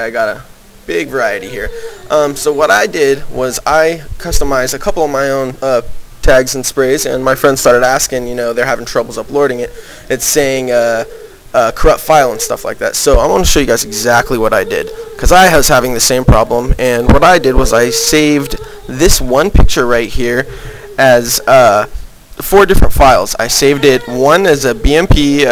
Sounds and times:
Speech: 0.0 - 25.5.

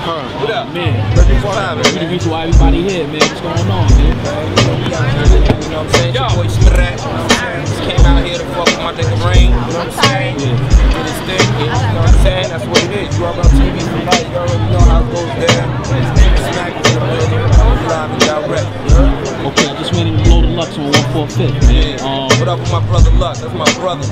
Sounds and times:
Speech: 0.0 - 24.1
Music: 0.8 - 24.1.

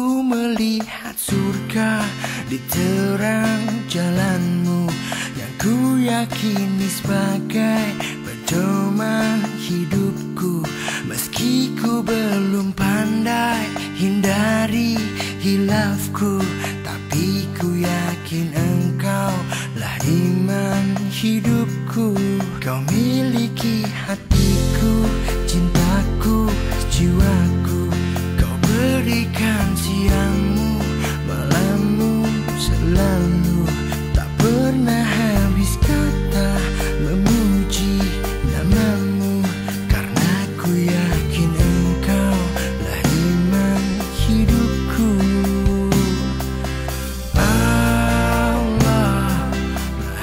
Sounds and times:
Tender music: 0.0 - 50.2.

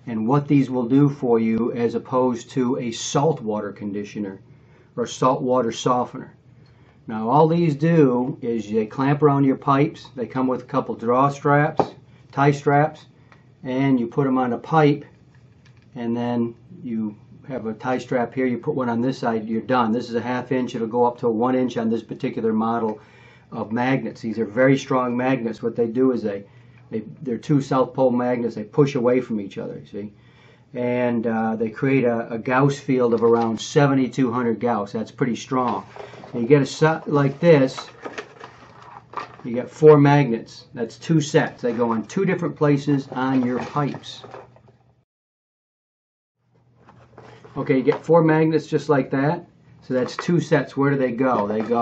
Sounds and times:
Speech: 0.0 - 4.4, 5.0 - 6.4, 7.1 - 15.1, 16.0 - 30.2, 30.8 - 38.0, 39.4 - 44.4, 47.5 - 51.8.

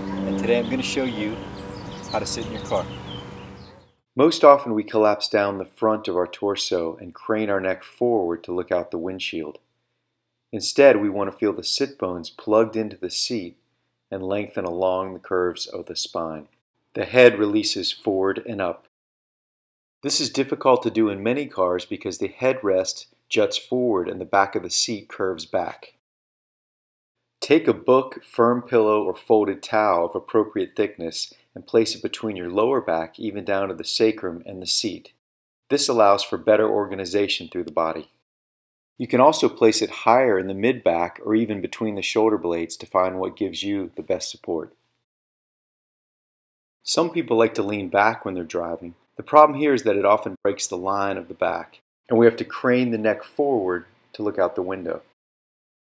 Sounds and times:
Speech: 0.0 - 1.5, 2.1 - 2.9, 4.2 - 9.6, 10.5 - 18.9, 20.0 - 26.0, 27.4 - 38.2, 39.0 - 44.8, 46.8 - 55.1.

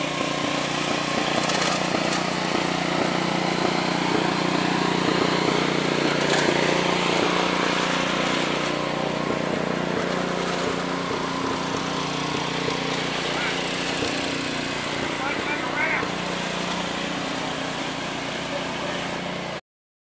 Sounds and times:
Heavy engine (low frequency): 0.0 - 19.6
Speech: 15.2 - 16.1, 18.5 - 19.2.

